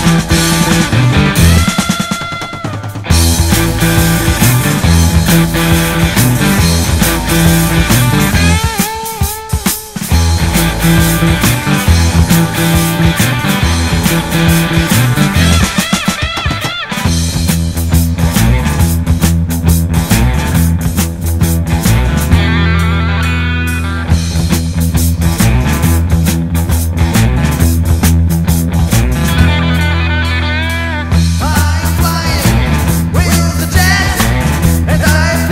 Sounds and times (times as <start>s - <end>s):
Music: 0.0s - 35.5s.